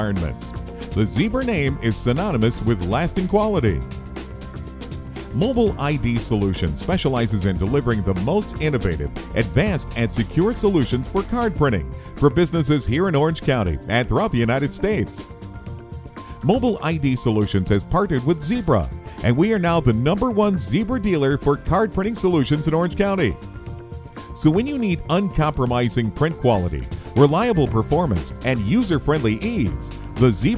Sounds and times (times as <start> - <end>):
Speech: 0.0 - 3.9, 5.4 - 15.2, 16.4 - 23.4, 24.4 - 30.5
Music: 0.0 - 30.5.